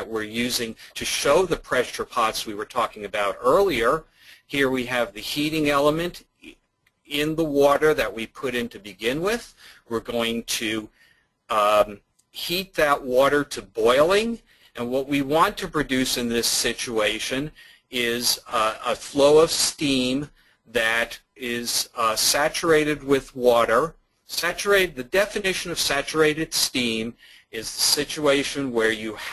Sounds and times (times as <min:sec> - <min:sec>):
Speech: 0:00.0 - 0:10.9, 0:11.5 - 0:29.3.